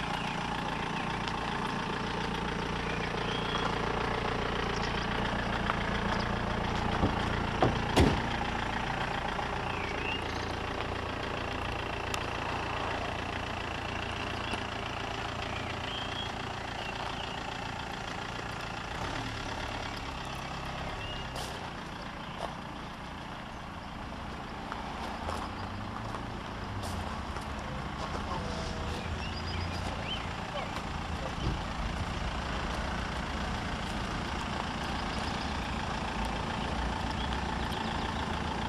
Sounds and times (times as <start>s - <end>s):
Medium engine (mid frequency): 0.0s - 38.6s
Vehicle: 0.0s - 38.6s.